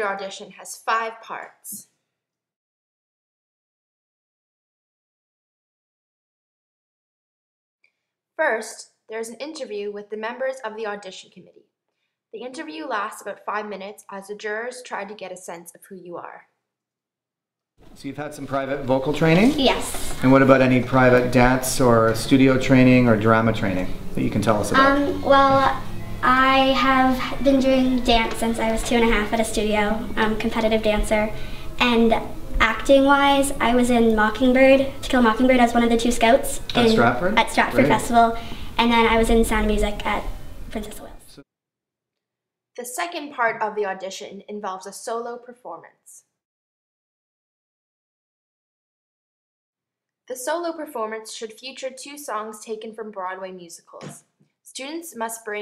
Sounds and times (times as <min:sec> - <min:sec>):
Speech: 0:00.0 - 0:01.8, 0:08.4 - 0:11.6, 0:12.4 - 0:16.4, 0:18.0 - 0:26.4, 0:36.2 - 0:40.2, 0:42.8 - 0:46.2, 0:50.3 - 0:55.6.